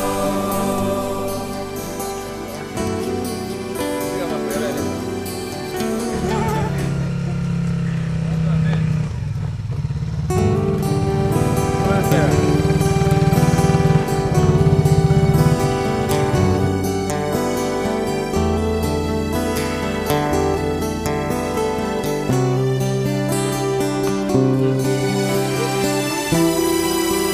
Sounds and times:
Music: 0:00.0 - 0:27.3.

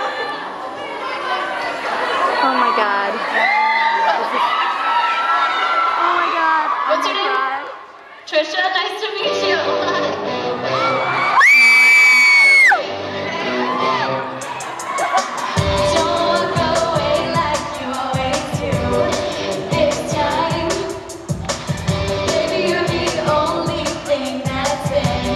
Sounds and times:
Music: 0:08.5 - 0:25.3.

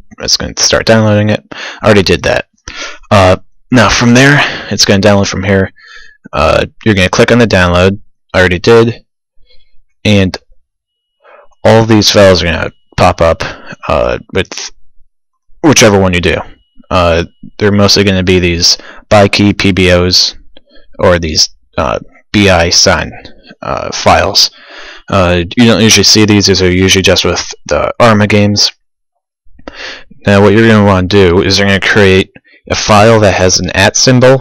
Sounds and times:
Speech: 0:00.0 - 0:09.0, 0:10.1 - 0:10.4, 0:11.3 - 0:14.7, 0:15.6 - 0:20.4, 0:21.0 - 0:28.8, 0:29.6 - 0:34.4.

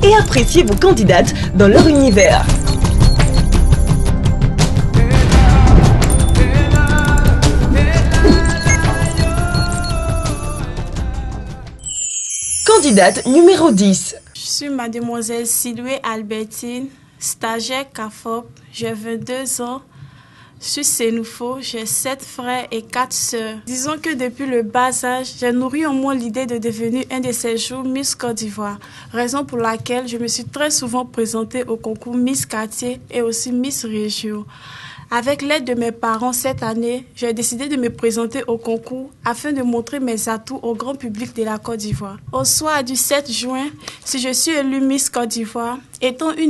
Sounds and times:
Speech: 0:00.0 - 0:02.5, 0:12.7 - 0:19.8, 0:20.6 - 0:34.4, 0:35.1 - 0:46.4.

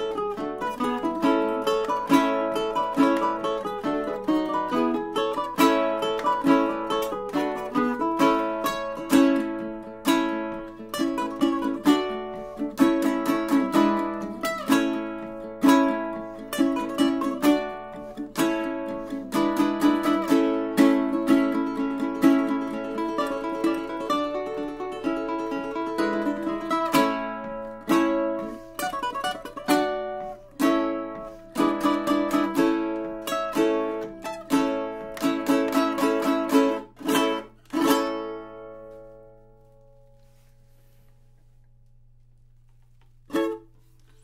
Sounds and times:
Mandolin: 0:00.0 - 0:41.7, 0:42.8 - 0:44.2
Guitar: 0:00.0 - 0:44.2
Ukulele: 0:00.0 - 0:44.2.

